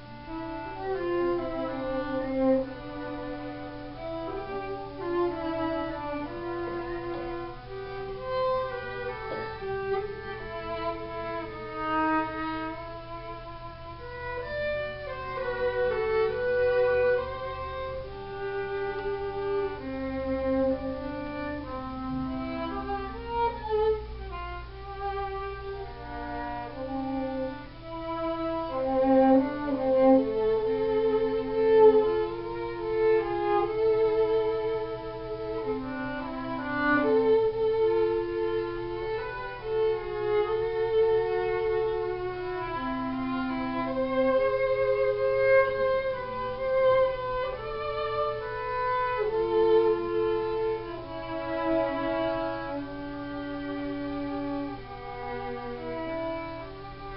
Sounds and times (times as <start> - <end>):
Violin, fiddle: 0.0 - 57.1.